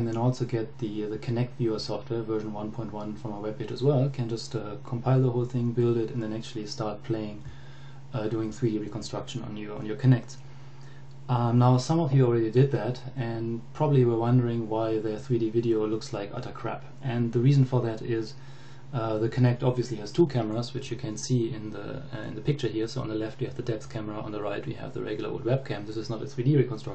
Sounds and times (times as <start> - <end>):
Speech: 0.0 - 7.5, 8.1 - 10.4, 11.3 - 26.9.